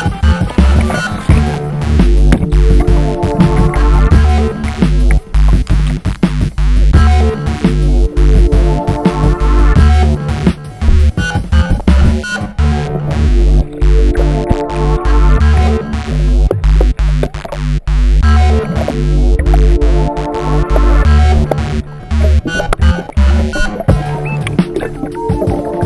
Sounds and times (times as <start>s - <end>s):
Sampler: 0.0s - 25.8s.